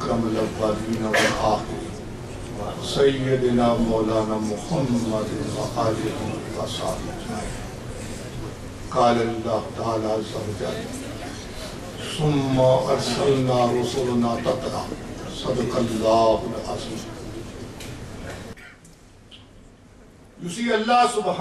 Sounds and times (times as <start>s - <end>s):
Male speech, man speaking: 0.0s - 2.0s, 2.6s - 7.6s, 8.9s - 11.0s, 12.0s - 17.3s, 20.4s - 21.4s
Narration, monologue: 0.0s - 21.4s.